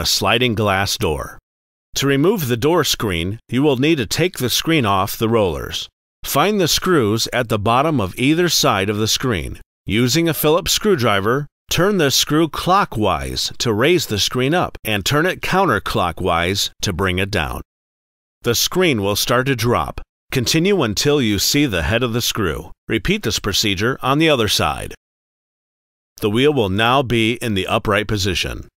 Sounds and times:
Speech: 0:00.0 - 0:01.4, 0:02.0 - 0:17.7, 0:18.4 - 0:25.0, 0:26.2 - 0:28.7.

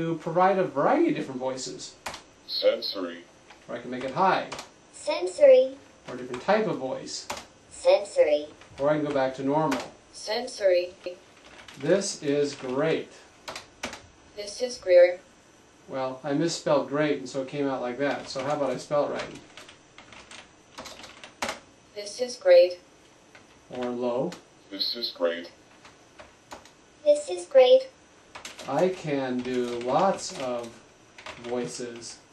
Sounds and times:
Speech synthesizer: 0:02.5 - 0:03.2, 0:05.0 - 0:05.8, 0:07.8 - 0:08.5, 0:10.2 - 0:11.1, 0:14.4 - 0:15.2, 0:22.0 - 0:22.8, 0:24.7 - 0:25.5, 0:27.1 - 0:27.9.

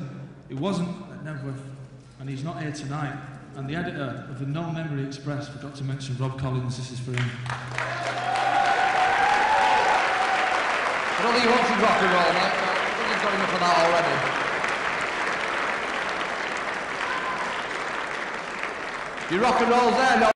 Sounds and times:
Male speech, man speaking: 0:00.0 - 0:07.4, 0:11.2 - 0:14.2, 0:19.3 - 0:20.3.

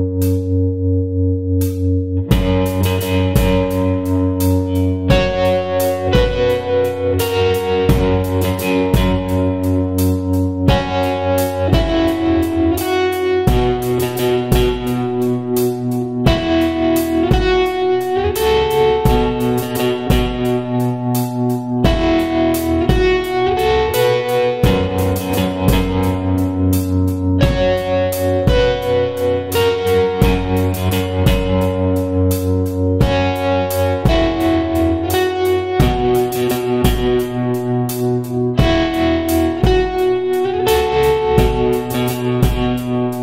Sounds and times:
Electric guitar: 0:00.0 - 0:43.2.

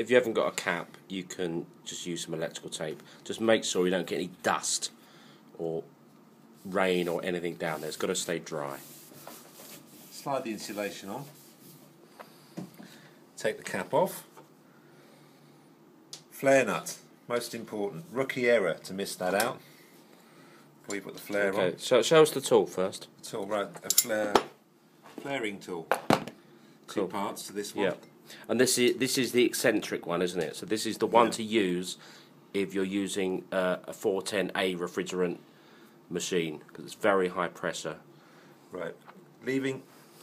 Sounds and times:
Speech: 0:00.0 - 0:05.0, 0:05.6 - 0:05.9, 0:06.6 - 0:08.9, 0:10.1 - 0:11.4, 0:13.4 - 0:14.3, 0:16.4 - 0:19.6, 0:20.9 - 0:24.5, 0:25.2 - 0:25.9, 0:26.9 - 0:35.4, 0:36.1 - 0:38.0, 0:38.7 - 0:39.9.

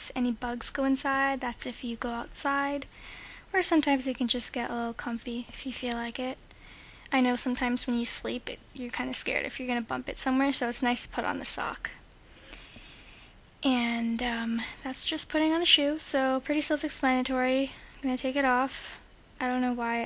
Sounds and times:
Speech: 0:00.0 - 0:02.9, 0:03.5 - 0:06.4, 0:07.1 - 0:12.0, 0:13.6 - 0:20.0.

